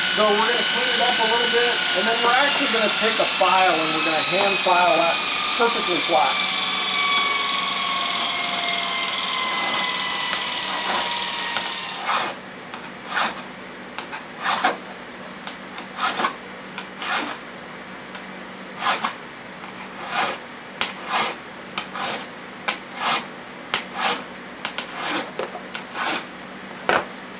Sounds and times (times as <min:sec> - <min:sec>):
Speech: 0:00.2 - 0:06.4.